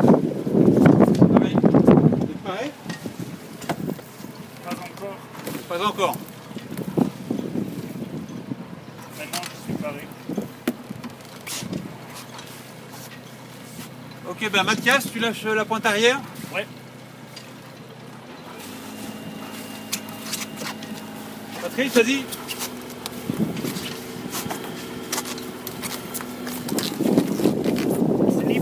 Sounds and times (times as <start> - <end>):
Speech: 4.6 - 6.2, 9.2 - 10.1, 14.2 - 16.7, 21.6 - 22.3, 28.3 - 28.6.